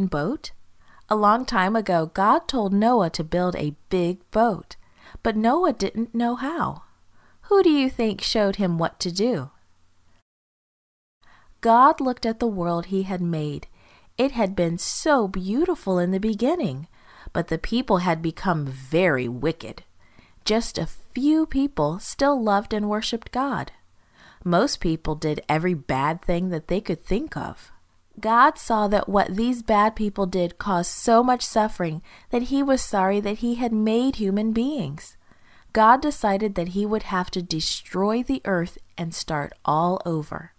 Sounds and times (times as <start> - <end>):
Speech: 0.0 - 6.9, 7.5 - 9.6, 11.6 - 23.8, 24.4 - 35.2, 35.8 - 40.5.